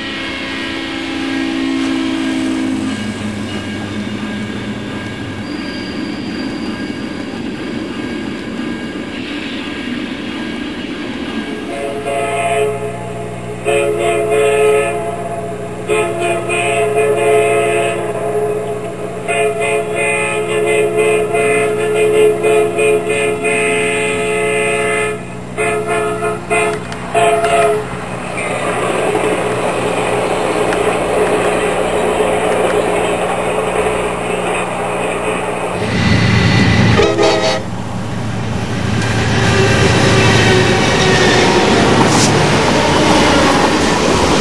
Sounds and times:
Train: 0.0s - 44.4s.

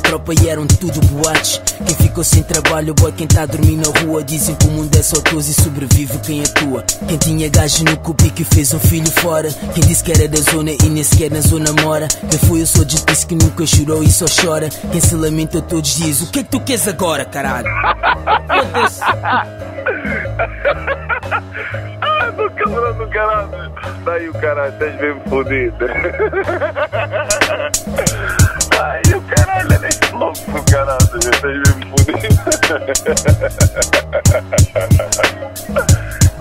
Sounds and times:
Music: 0.0s - 36.4s
Speech: 22.0s - 26.0s.

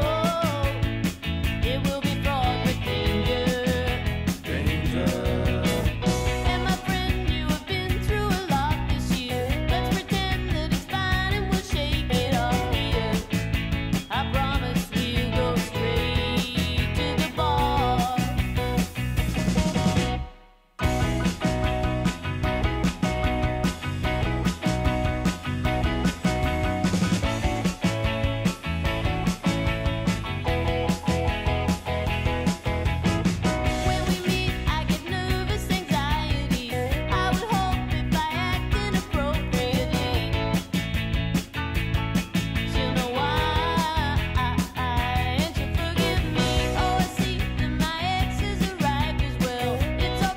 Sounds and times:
Music: 0.0s - 50.3s.

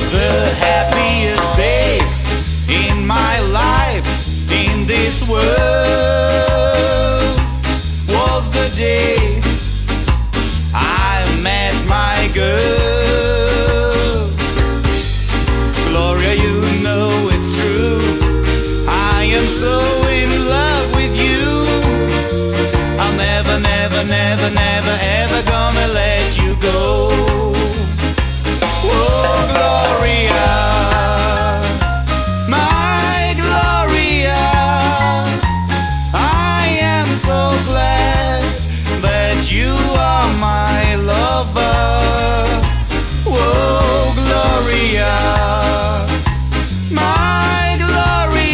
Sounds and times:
Music: 0.0s - 48.5s.

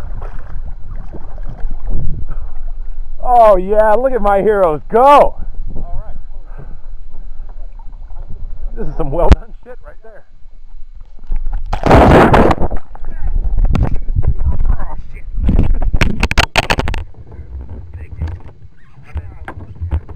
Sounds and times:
Wind noise (microphone): 0.0s - 2.5s, 11.3s - 20.1s
Boat, Water vehicle: 0.0s - 20.1s.

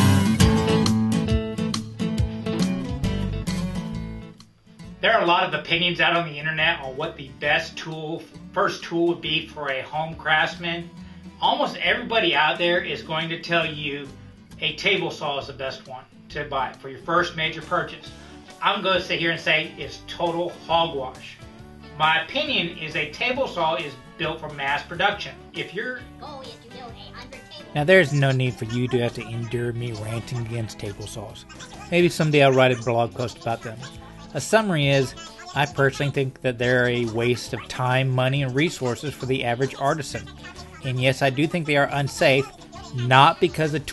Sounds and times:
Music: 0.0s - 43.9s
Speech: 5.0s - 21.4s, 22.0s - 43.9s.

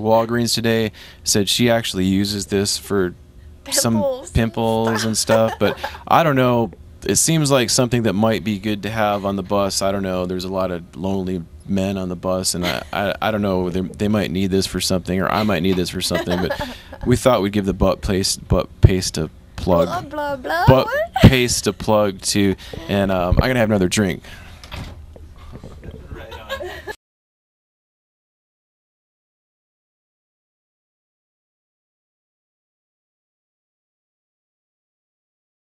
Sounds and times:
Speech: 0.0s - 24.2s.

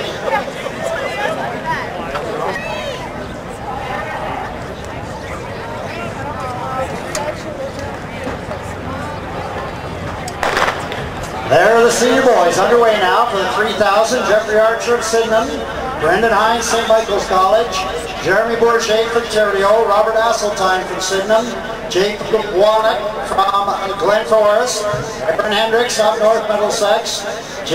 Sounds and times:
Speech: 0.0s - 10.4s, 11.3s - 27.7s.

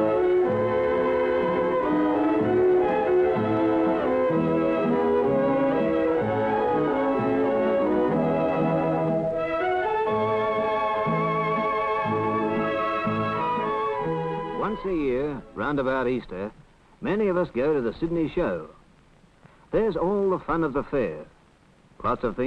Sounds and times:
Music: 0.0s - 16.4s
Speech: 14.6s - 18.8s, 19.7s - 21.3s, 22.0s - 22.4s.

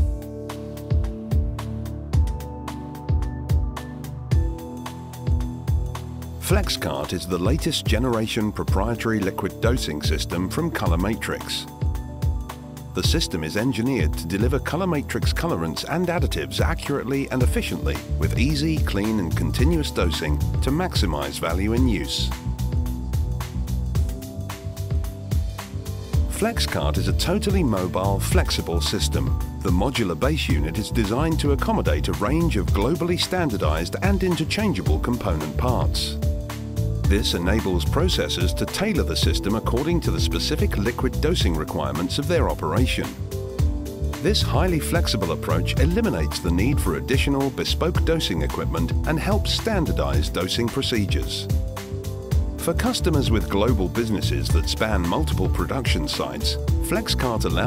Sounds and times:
Music: 0.0s - 57.6s
Speech: 6.4s - 11.7s, 13.0s - 22.4s, 26.3s - 36.2s, 37.1s - 43.2s, 44.2s - 51.5s, 52.6s - 57.6s.

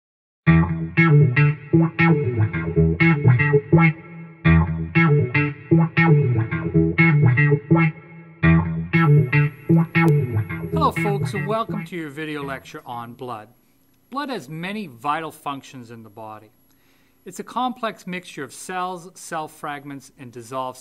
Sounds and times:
Music: 0.5s - 12.5s.

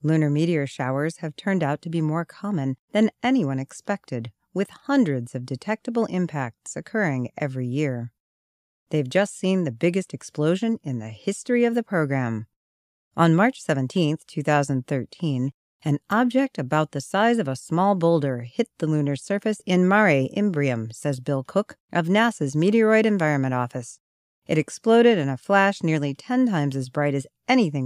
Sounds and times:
Speech: 0.0s - 8.2s, 8.9s - 12.5s, 13.2s - 27.8s.

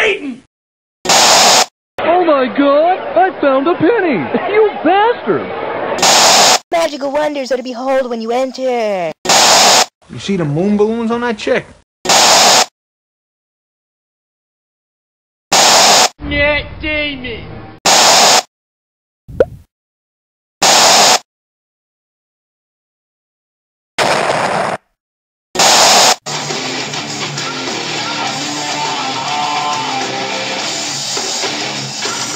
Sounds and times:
Speech: 6.7s - 9.2s, 10.1s - 11.8s, 16.2s - 17.5s.

